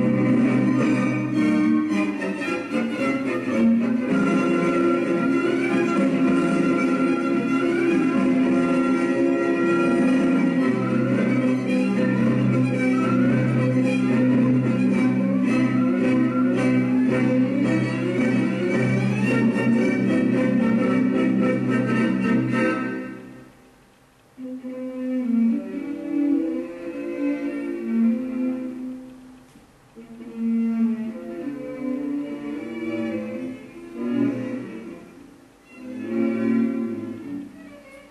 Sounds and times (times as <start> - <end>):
Music: 0.0 - 38.1.